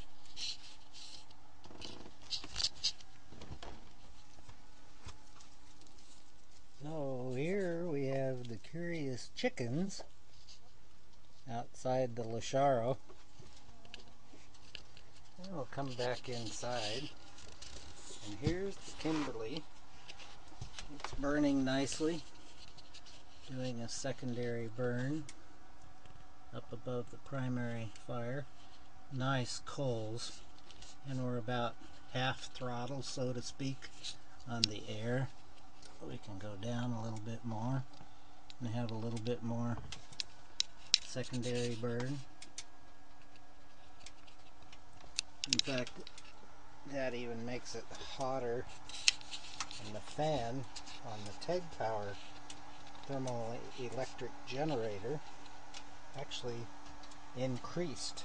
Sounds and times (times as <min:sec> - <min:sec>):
Speech: 0:06.8 - 0:10.1, 0:11.4 - 0:13.0, 0:15.4 - 0:17.2, 0:18.2 - 0:19.7, 0:21.1 - 0:22.3, 0:23.5 - 0:25.3, 0:26.5 - 0:28.5, 0:29.1 - 0:30.4, 0:31.0 - 0:35.4, 0:36.0 - 0:37.9, 0:38.6 - 0:39.9, 0:41.1 - 0:42.3, 0:45.5 - 0:46.1, 0:46.9 - 0:48.7, 0:49.8 - 0:52.2, 0:53.1 - 0:55.2, 0:56.2 - 0:56.7, 0:57.4 - 0:58.2.